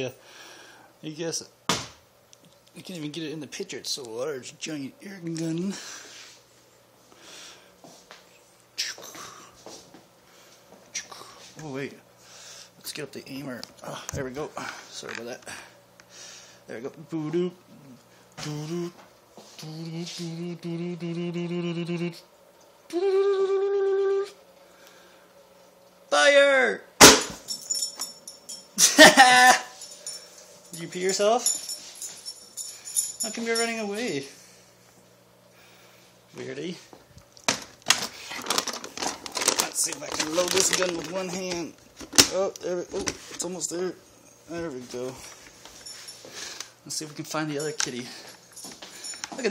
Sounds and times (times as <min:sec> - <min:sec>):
Speech: 0:00.0 - 0:00.2, 0:01.0 - 0:01.5, 0:02.8 - 0:05.8, 0:11.6 - 0:12.0, 0:12.8 - 0:15.5, 0:16.7 - 0:17.6, 0:26.1 - 0:26.9, 0:33.2 - 0:34.4, 0:36.3 - 0:36.9, 0:39.6 - 0:45.3, 0:46.9 - 0:48.2.